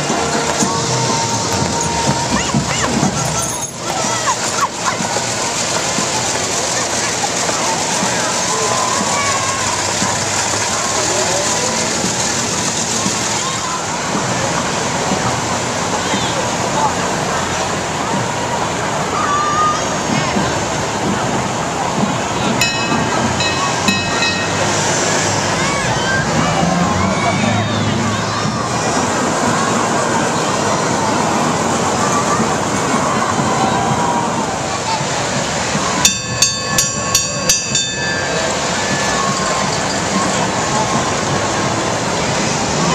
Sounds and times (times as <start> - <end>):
Engine: 0.0 - 42.9
Vehicle: 0.0 - 42.9
Speech: 2.1 - 36.0.